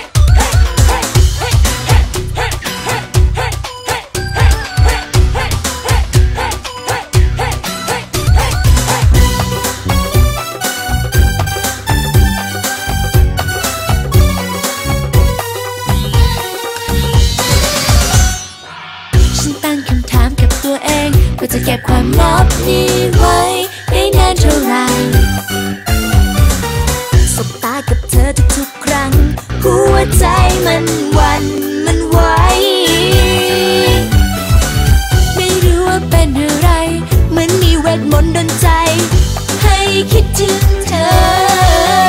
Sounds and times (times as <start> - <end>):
Music: 0.0 - 42.0.